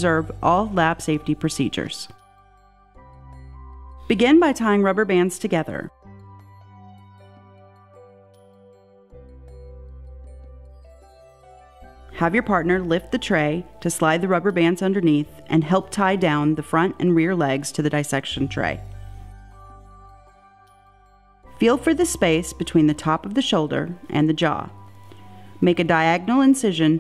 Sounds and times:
Speech: 0:00.0 - 0:02.2, 0:04.1 - 0:05.9, 0:12.2 - 0:18.8, 0:21.6 - 0:24.7, 0:25.6 - 0:27.0
Music: 0:00.0 - 0:27.0.

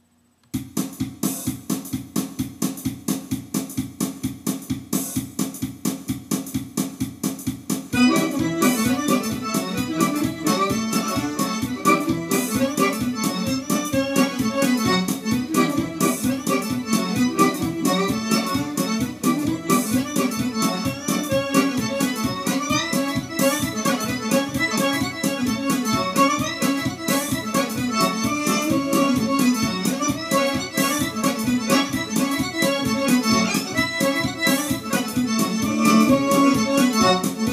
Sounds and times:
Musical instrument: 0:08.0 - 0:37.5.

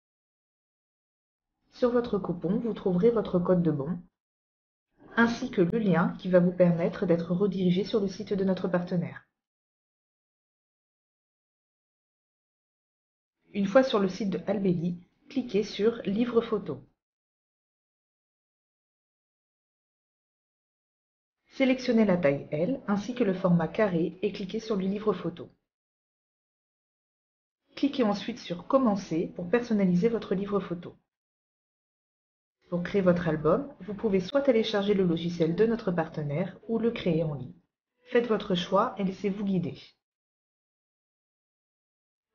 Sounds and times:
Speech: 0:01.8 - 0:04.0, 0:05.0 - 0:09.2, 0:13.5 - 0:16.9, 0:21.6 - 0:25.5, 0:27.8 - 0:31.0, 0:32.7 - 0:37.5, 0:38.1 - 0:40.0.

